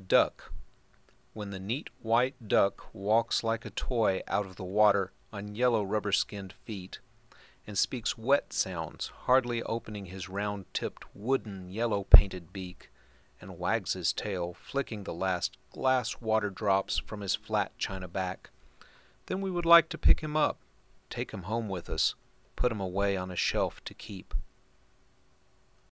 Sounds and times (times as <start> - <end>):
Speech: 0.0 - 0.6, 1.4 - 7.0, 7.7 - 18.5, 19.3 - 24.5.